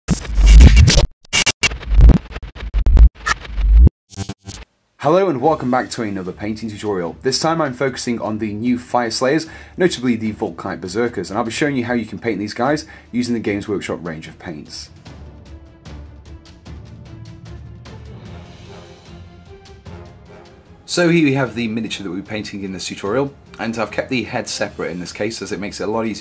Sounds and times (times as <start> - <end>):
Speech: 5.0 - 15.0, 20.9 - 26.2
Music: 5.0 - 26.2.